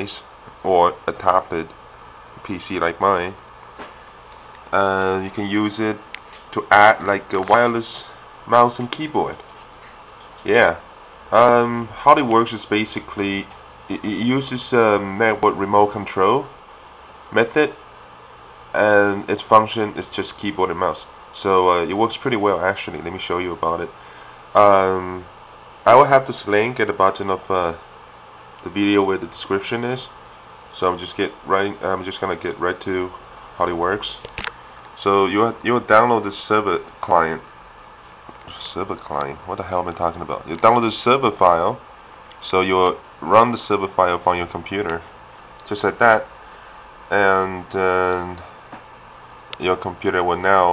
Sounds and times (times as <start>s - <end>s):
Speech: 0.0s - 1.8s, 2.4s - 3.4s, 4.7s - 9.4s, 10.4s - 16.6s, 17.3s - 17.8s, 18.7s - 24.0s, 24.6s - 27.9s, 28.6s - 34.3s, 35.0s - 37.5s, 38.4s - 46.3s, 47.1s - 48.6s, 49.6s - 50.7s.